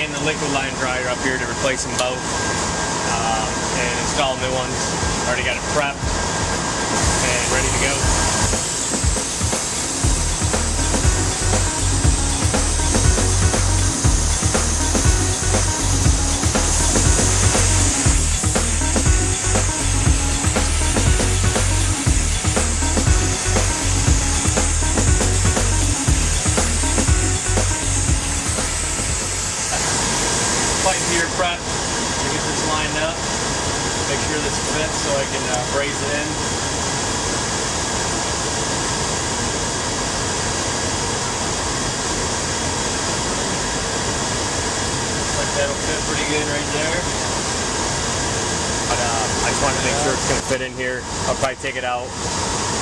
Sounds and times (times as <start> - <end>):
Spray: 3.1 - 50.6
Music: 4.1 - 29.9.